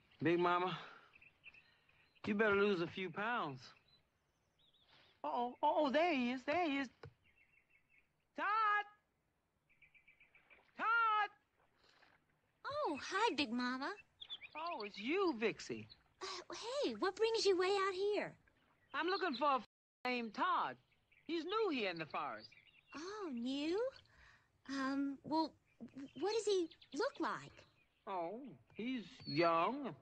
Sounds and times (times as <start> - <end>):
Speech: 2.3 - 3.7, 5.3 - 7.0, 8.4 - 9.0, 10.8 - 11.4, 12.7 - 14.0, 14.6 - 18.3, 19.0 - 24.0, 24.7 - 30.0.